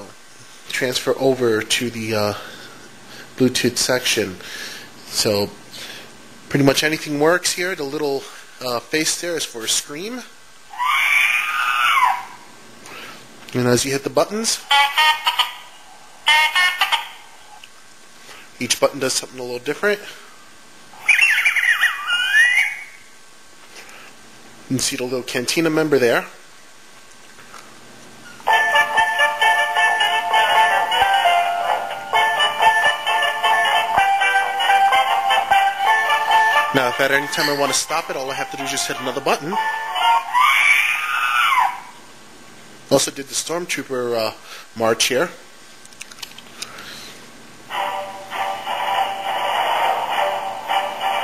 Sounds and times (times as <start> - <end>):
Speech: 0.0 - 2.4, 3.4 - 4.4, 5.1 - 5.6, 6.5 - 10.4, 13.5 - 14.6, 18.6 - 20.2, 24.7 - 26.4, 36.8 - 39.6, 42.9 - 45.5
Music: 16.3 - 17.2, 28.5 - 40.4, 47.7 - 51.2.